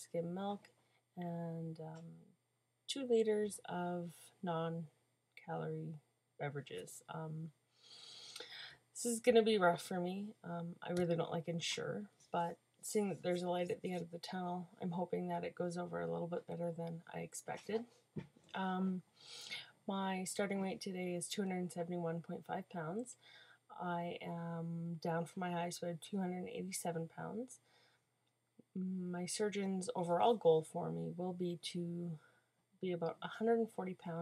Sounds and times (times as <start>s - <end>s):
Speech: 0.0s - 2.2s, 2.9s - 7.6s, 8.5s - 17.9s, 18.6s - 19.0s, 19.6s - 27.6s, 28.7s - 32.2s, 32.8s - 34.2s.